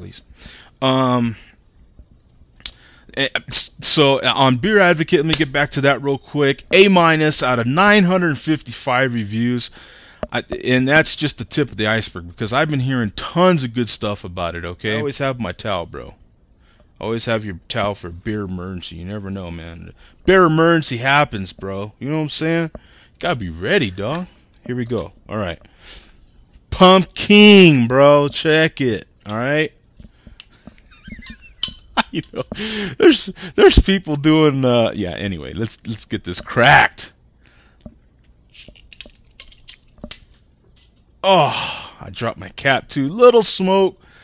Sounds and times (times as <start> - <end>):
Speech: 0.0 - 1.5, 3.1 - 9.7, 10.3 - 16.2, 17.0 - 25.6, 26.7 - 29.8, 33.0 - 37.2, 41.3 - 44.0
Inside, small room: 0.0 - 44.2.